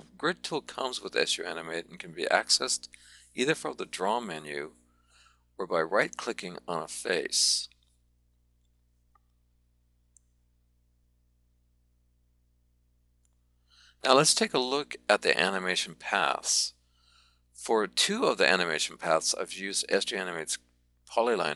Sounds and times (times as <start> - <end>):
Speech: 0.0 - 4.7, 5.6 - 7.8, 14.0 - 16.8, 17.6 - 21.5.